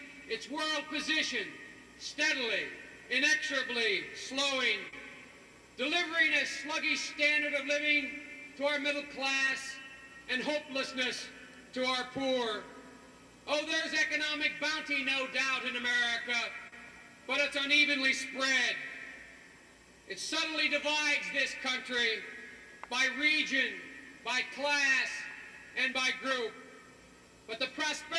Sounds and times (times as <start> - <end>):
Narration, monologue: 0.0 - 28.1
Male speech, man speaking: 0.3 - 5.0, 5.8 - 12.7, 13.5 - 16.7, 17.3 - 19.0, 20.1 - 22.3, 22.9 - 26.6, 27.5 - 28.1.